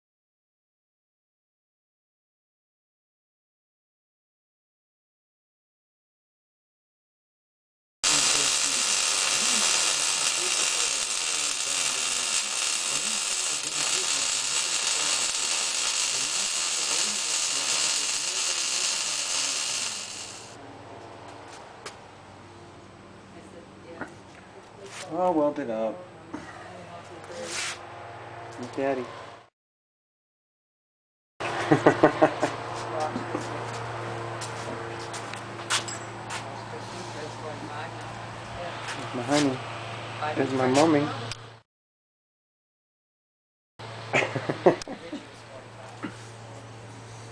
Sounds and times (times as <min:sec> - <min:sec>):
Speech: 0:08.1 - 0:15.2, 0:16.1 - 0:18.8, 0:23.3 - 0:27.7, 0:28.6 - 0:29.1, 0:32.8 - 0:33.7, 0:36.6 - 0:39.6, 0:40.2 - 0:41.4, 0:44.9 - 0:46.6.